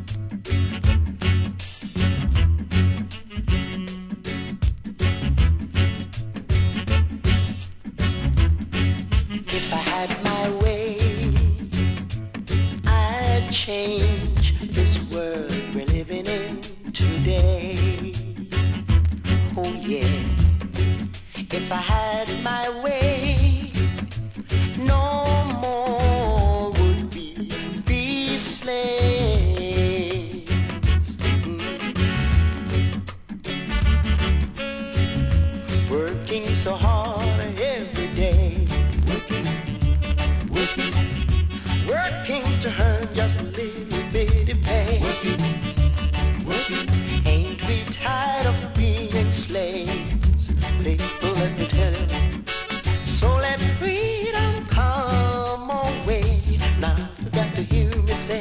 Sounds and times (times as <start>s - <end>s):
Music: 0.0s - 58.4s.